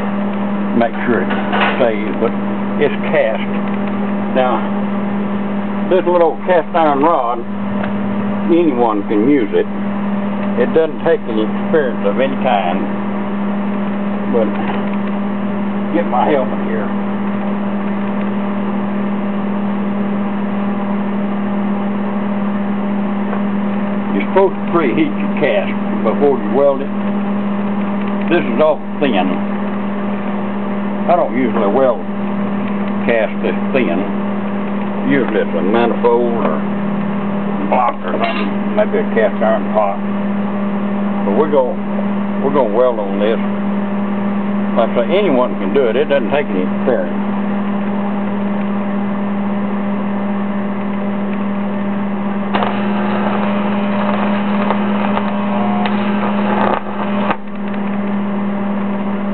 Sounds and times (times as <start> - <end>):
Speech: 0.8 - 3.5, 4.3 - 4.7, 5.9 - 7.5, 8.5 - 9.7, 10.6 - 12.9, 14.3 - 14.7, 15.9 - 17.0, 24.1 - 26.9, 28.3 - 29.4, 31.1 - 32.1, 33.0 - 34.1, 35.0 - 36.6, 37.6 - 40.1, 41.3 - 41.8, 42.4 - 43.5, 44.8 - 47.2.